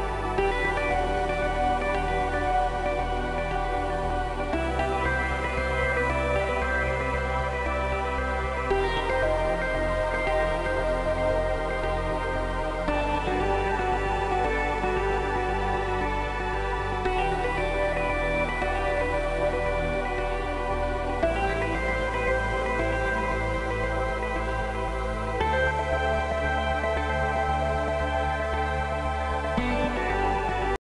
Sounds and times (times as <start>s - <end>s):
Music: 0.0s - 30.8s.